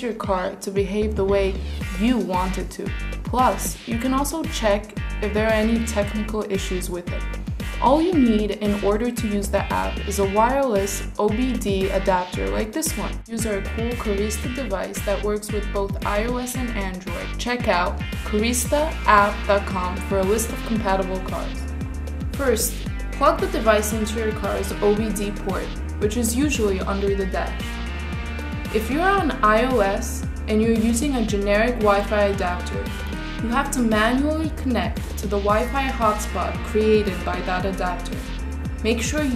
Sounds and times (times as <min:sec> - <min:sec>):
Speech: 0:00.0 - 0:21.6, 0:22.4 - 0:27.6, 0:28.7 - 0:38.2, 0:38.8 - 0:39.3
Music: 0:00.0 - 0:39.3.